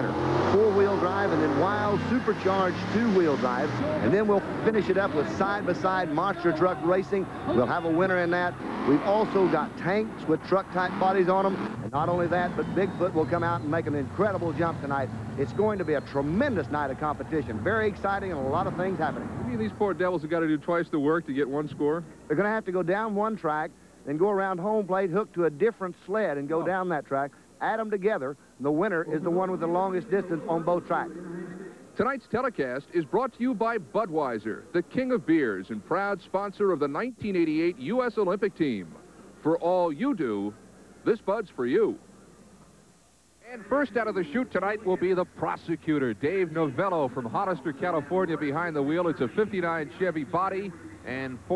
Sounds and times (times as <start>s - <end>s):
Truck: 0.0s - 20.2s
Speech: 0.0s - 42.0s, 43.4s - 51.5s.